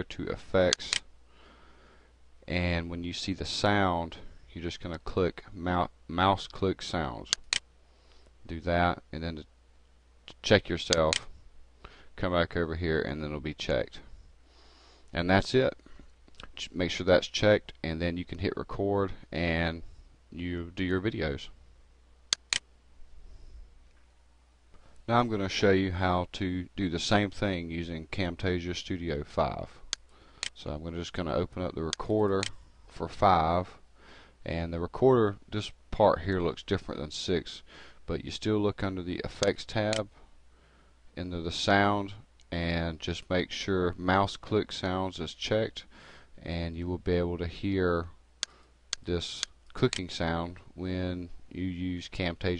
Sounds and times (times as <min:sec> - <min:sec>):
Speech: 0:00.0 - 0:01.0, 0:02.5 - 0:07.4, 0:08.5 - 0:09.5, 0:10.3 - 0:11.3, 0:12.2 - 0:14.1, 0:15.1 - 0:15.8, 0:16.5 - 0:21.6, 0:25.1 - 0:29.8, 0:30.6 - 0:33.8, 0:34.4 - 0:40.2, 0:41.2 - 0:48.2, 0:49.0 - 0:52.5.